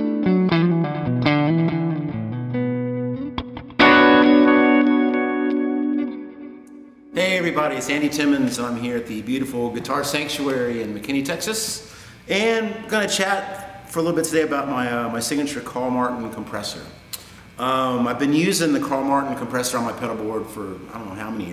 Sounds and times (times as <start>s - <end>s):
Speech: 7.2s - 17.0s, 17.6s - 21.5s.